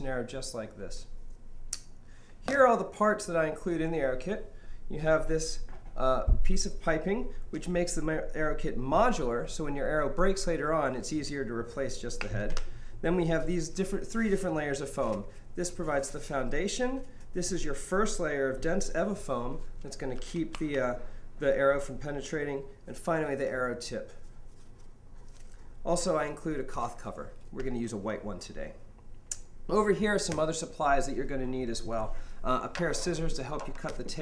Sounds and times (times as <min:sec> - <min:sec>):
Speech: 0:00.0 - 0:01.1, 0:02.4 - 0:24.2, 0:25.8 - 0:28.8, 0:29.7 - 0:34.2.